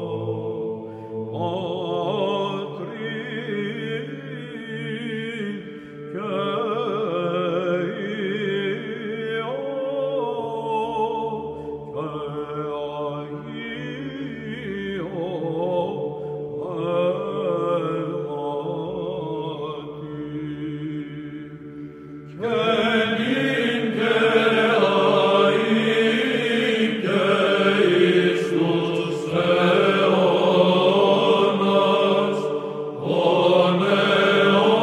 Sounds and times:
Mantra: 0:00.0 - 0:21.6, 0:22.3 - 0:34.8.

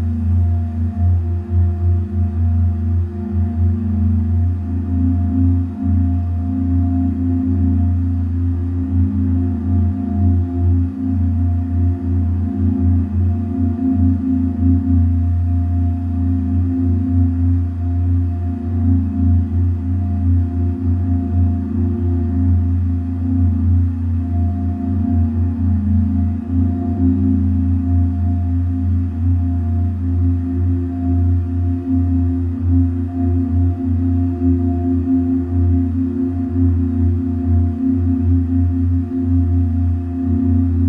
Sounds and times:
Singing bowl: 0:00.0 - 0:40.8.

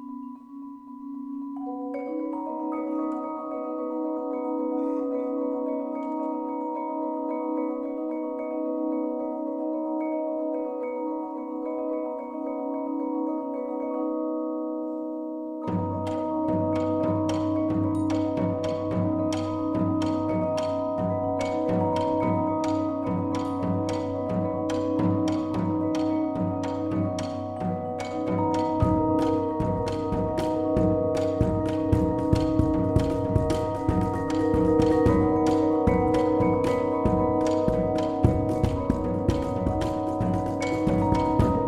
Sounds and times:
Music: 0:00.0 - 0:41.6.

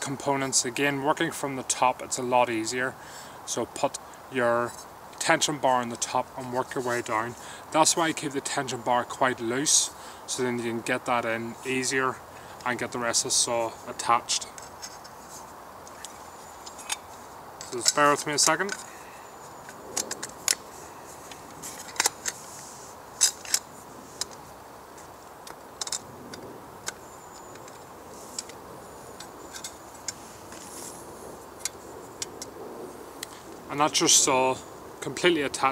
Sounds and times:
Speech: 0:00.0 - 0:14.5, 0:17.7 - 0:18.8, 0:33.7 - 0:35.7.

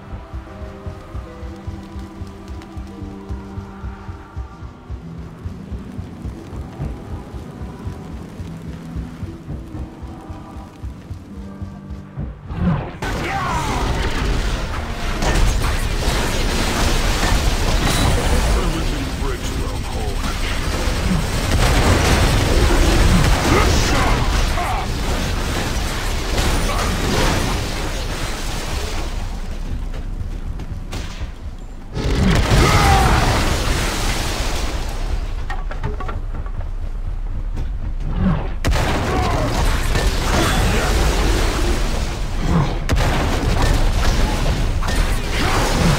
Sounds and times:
Speech: 0:18.3 - 0:20.2.

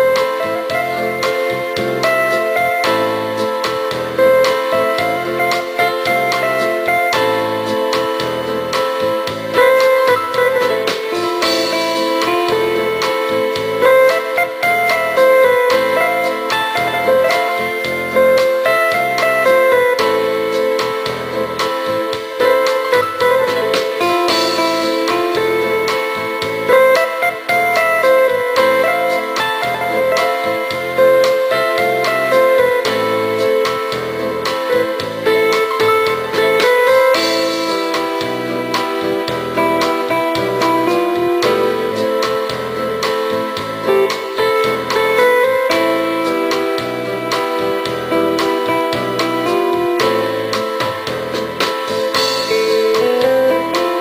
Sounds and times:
Background music: 0:00.0 - 0:54.0
Rhythm and blues: 0:00.0 - 0:54.0.

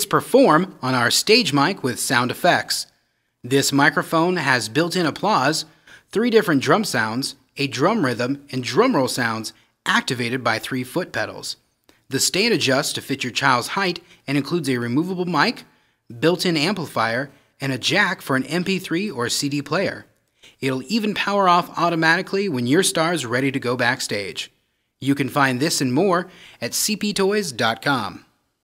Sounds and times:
Speech: 0:00.0 - 0:28.4.

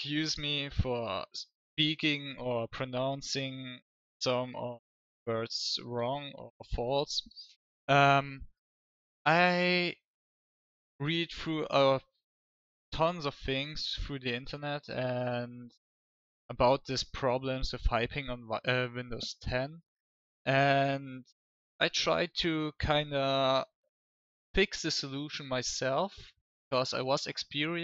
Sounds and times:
Speech: 0:00.0 - 0:08.5, 0:09.3 - 0:10.0, 0:11.0 - 0:12.1, 0:12.9 - 0:15.8, 0:16.5 - 0:19.8, 0:20.5 - 0:23.7, 0:24.6 - 0:27.8.

